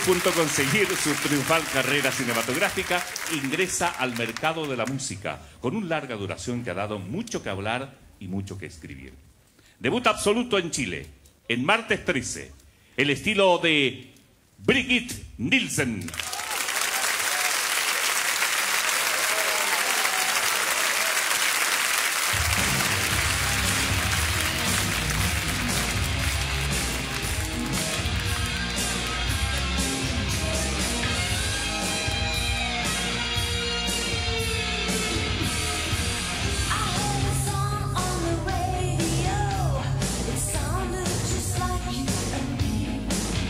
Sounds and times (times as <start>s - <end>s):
Speech: 0.0s - 9.2s, 9.8s - 16.2s.